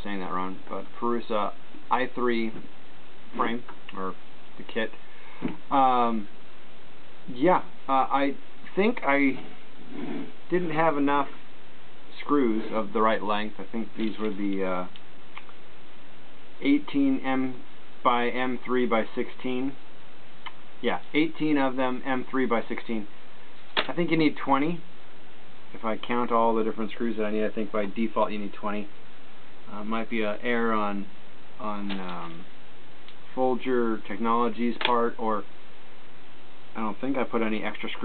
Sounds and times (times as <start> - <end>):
Speech: 0.0 - 2.7, 3.3 - 5.0, 5.7 - 6.4, 7.3 - 9.6, 10.5 - 11.4, 12.1 - 15.0, 16.6 - 19.8, 20.8 - 23.1, 23.8 - 24.9, 25.7 - 28.9, 29.7 - 32.5, 33.3 - 35.5, 36.8 - 38.0.